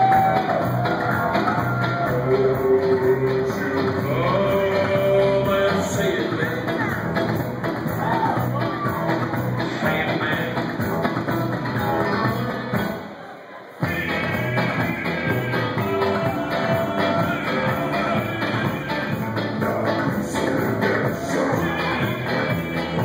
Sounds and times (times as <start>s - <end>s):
Singing: 0.0s - 7.1s, 11.3s - 23.0s
Music: 0.0s - 13.2s, 13.8s - 23.0s.